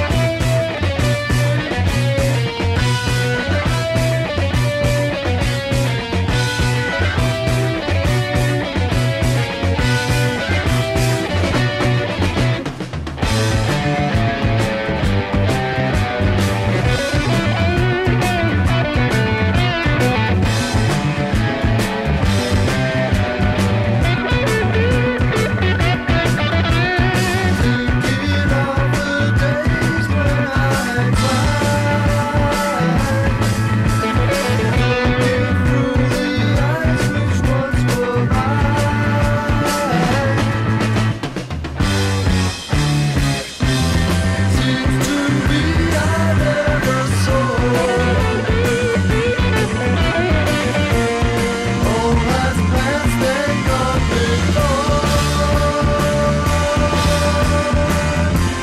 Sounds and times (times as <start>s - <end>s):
Music: 0.0s - 58.6s.